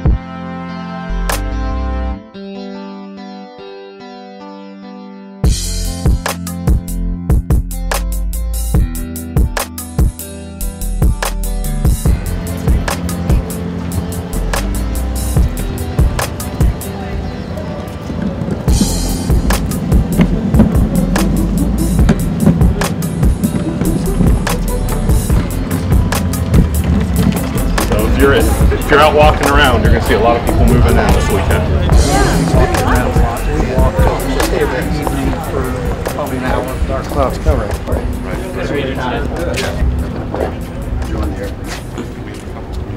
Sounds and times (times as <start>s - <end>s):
Music: 0.0s - 42.9s
Speech: 27.9s - 39.9s, 40.6s - 42.9s.